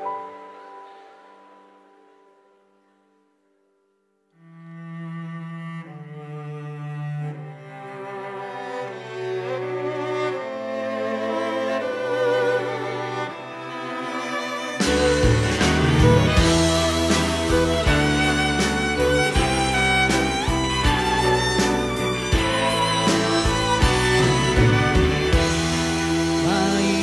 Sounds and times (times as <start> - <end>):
Music: 0.0 - 27.0.